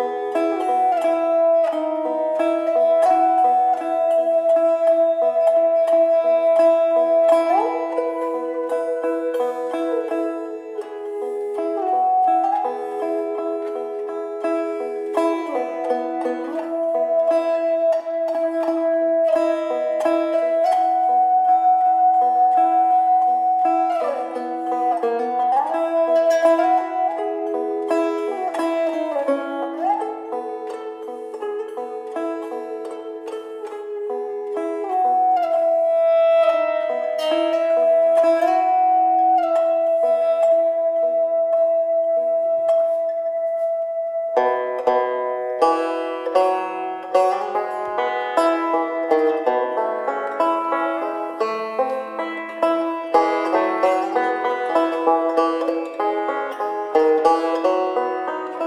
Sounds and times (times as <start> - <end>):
Banjo: 0.0 - 58.6.